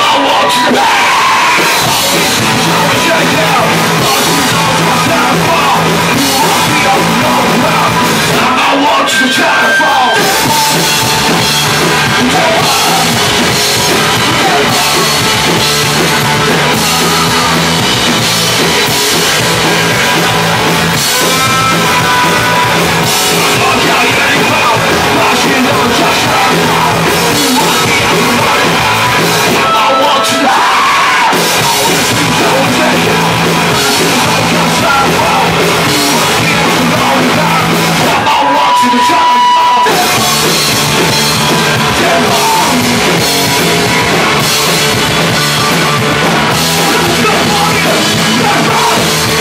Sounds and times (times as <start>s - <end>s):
Music: 0.0s - 49.4s.